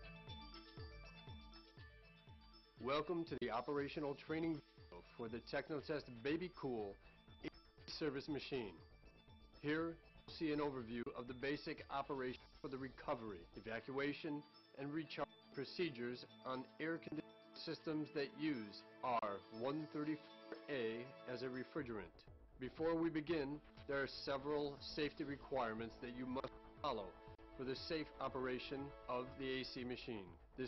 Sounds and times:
Music: 0:00.0 - 0:30.6
Speech: 0:02.8 - 0:07.0, 0:07.9 - 0:08.8, 0:09.6 - 0:30.6.

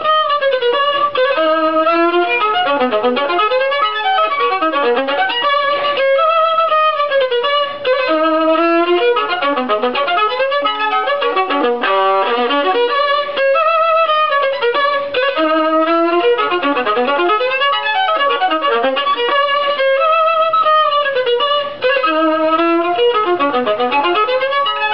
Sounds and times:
Violin, fiddle: 0:00.0 - 0:24.9.

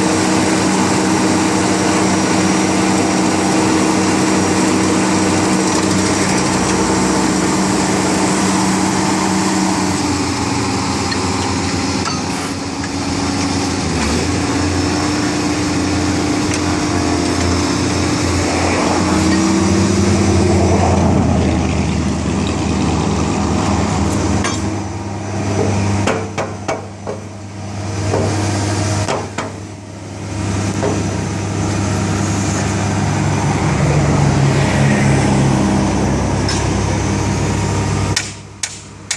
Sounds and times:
Hammer: 0:25.6 - 0:27.2, 0:29.1 - 0:29.6, 0:38.2 - 0:39.1.

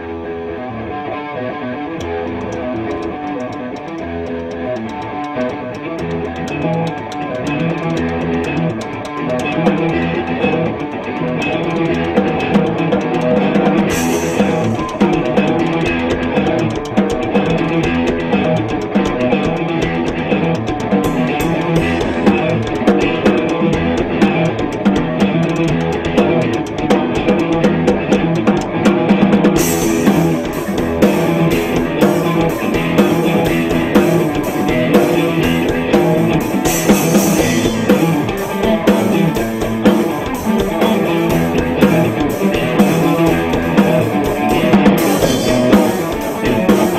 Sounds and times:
Music: 0:00.0 - 0:46.9.

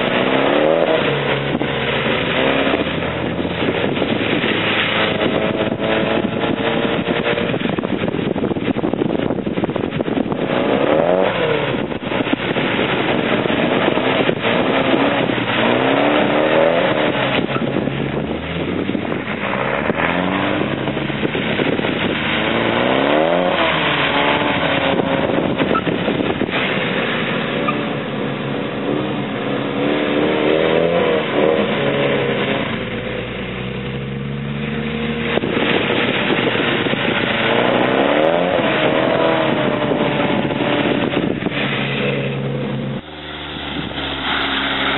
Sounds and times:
Accelerating, revving, vroom: 0:00.0 - 0:07.8, 0:10.4 - 0:17.8, 0:18.5 - 0:28.0, 0:28.7 - 0:44.9
Race car, auto racing: 0:00.0 - 0:44.9.

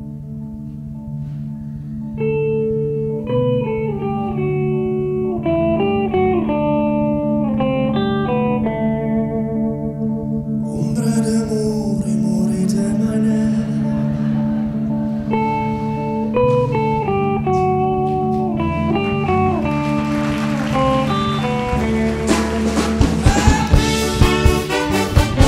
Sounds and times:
Music: 0:00.0 - 0:25.4.

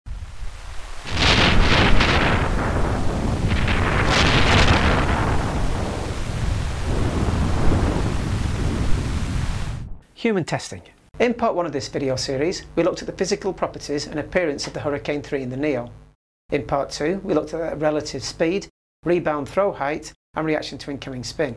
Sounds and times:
Eruption: 0:00.3 - 0:09.9.

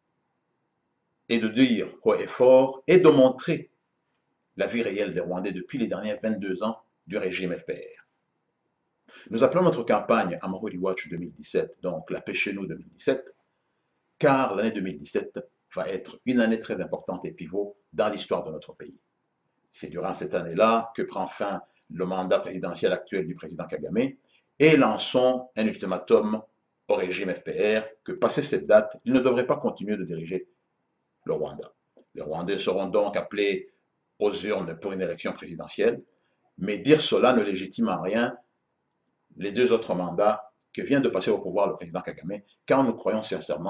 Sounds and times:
Speech: 0:01.3 - 0:03.7, 0:04.6 - 0:08.0, 0:09.2 - 0:13.3, 0:14.2 - 0:19.0, 0:19.8 - 0:30.4, 0:31.3 - 0:36.0, 0:36.6 - 0:38.4, 0:39.4 - 0:43.6.

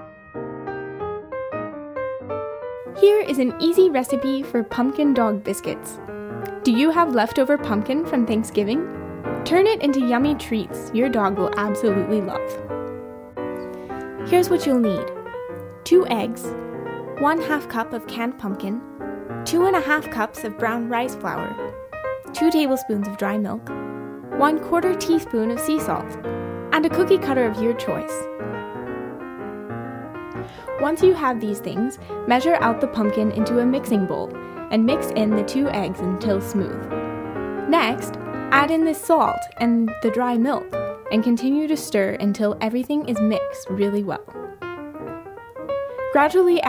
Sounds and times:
Music: 0:00.0 - 0:46.6
Speech: 0:03.0 - 0:06.0, 0:06.6 - 0:08.9, 0:09.5 - 0:12.6, 0:14.3 - 0:15.2, 0:15.9 - 0:16.5, 0:17.2 - 0:18.8, 0:19.5 - 0:21.6, 0:22.3 - 0:23.6, 0:24.4 - 0:26.1, 0:26.8 - 0:28.3, 0:30.8 - 0:36.9, 0:37.7 - 0:44.3, 0:46.2 - 0:46.6.

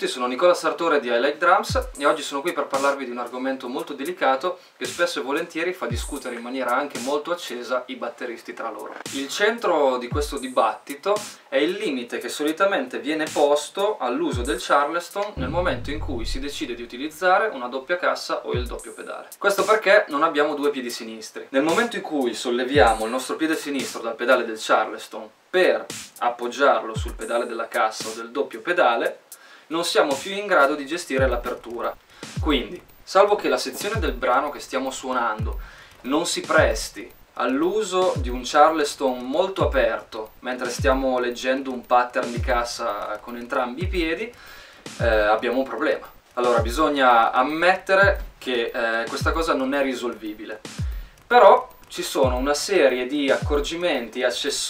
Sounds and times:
Hi-hat: 0:01.6 - 0:04.1, 0:04.8 - 0:07.3, 0:08.9 - 0:09.4, 0:10.0 - 0:12.6, 0:13.2 - 0:17.2, 0:18.6 - 0:19.9, 0:21.7 - 0:24.1, 0:25.9 - 0:28.4, 0:29.1 - 0:54.7.

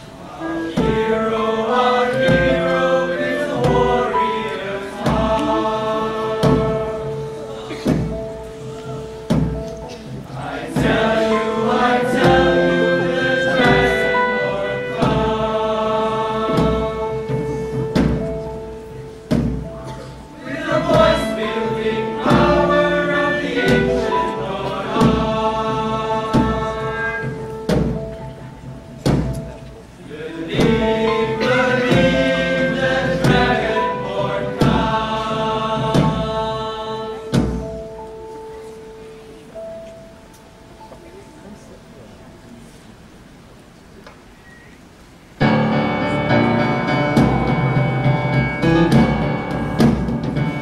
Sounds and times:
Choir: 0:00.0 - 0:27.9, 0:30.0 - 0:39.6.

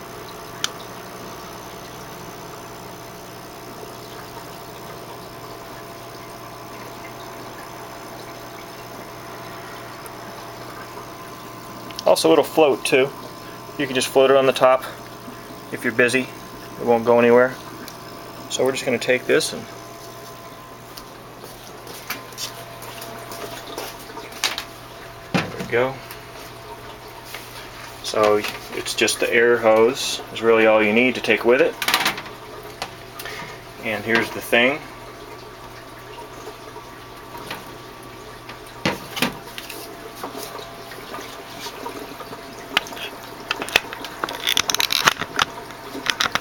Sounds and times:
Water: 0:00.0 - 0:46.4.

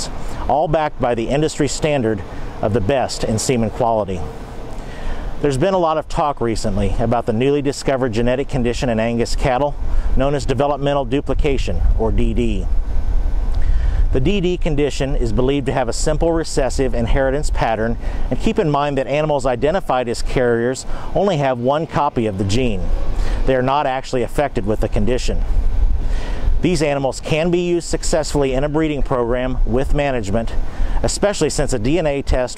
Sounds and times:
Speech: 0:00.0 - 0:04.3, 0:05.4 - 0:12.7, 0:14.1 - 0:22.9, 0:23.5 - 0:25.5, 0:26.6 - 0:32.5.

